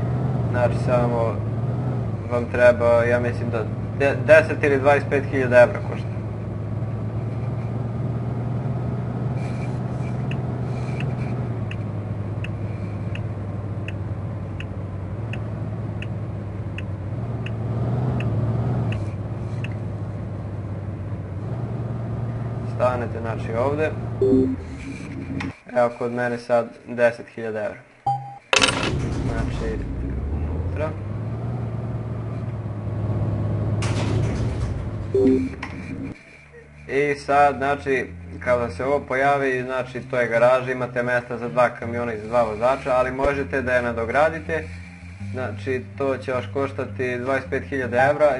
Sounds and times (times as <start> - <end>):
Truck: 0.0 - 48.4
Speech: 0.5 - 1.4, 2.3 - 6.1, 22.7 - 24.0, 25.7 - 27.8, 29.2 - 29.9, 30.7 - 31.0, 36.9 - 48.4.